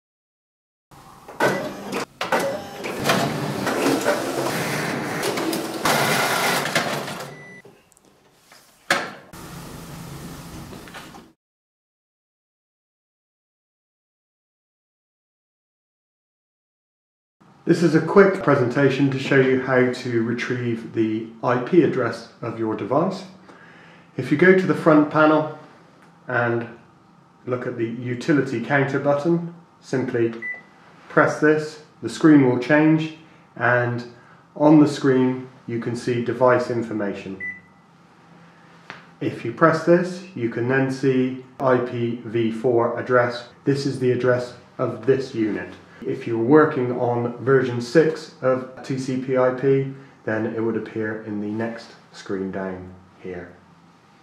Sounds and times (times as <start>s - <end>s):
Printer: 1.2s - 7.6s.